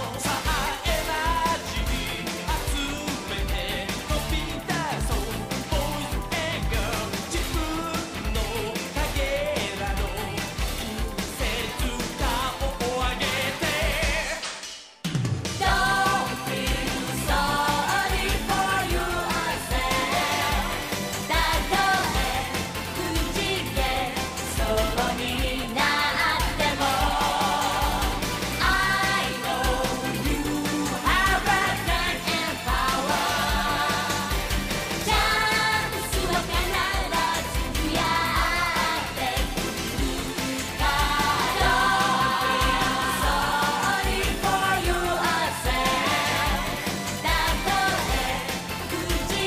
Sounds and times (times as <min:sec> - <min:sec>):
Music: 0:00.0 - 0:49.4.